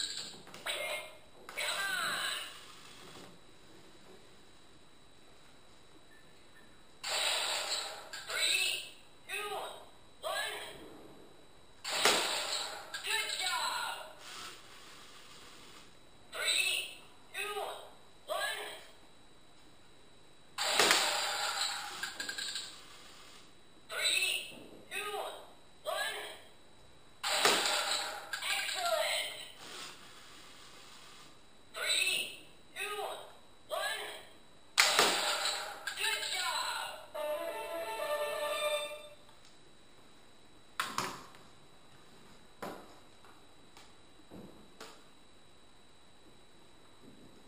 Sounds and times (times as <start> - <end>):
Inside, small room: 0.0 - 47.4
Speech: 0.6 - 2.5, 8.3 - 10.8, 16.3 - 19.0, 23.9 - 26.5, 28.4 - 29.5, 31.8 - 34.3, 36.0 - 37.1.